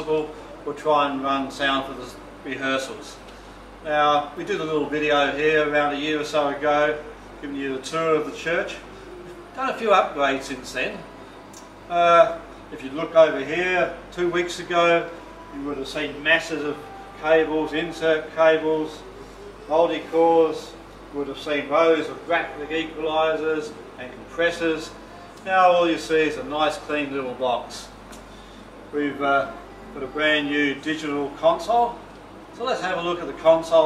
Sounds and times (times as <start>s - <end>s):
Speech: 0.0s - 3.2s, 3.8s - 11.1s, 11.9s - 19.0s, 19.7s - 27.9s, 29.0s - 32.0s, 32.6s - 33.8s.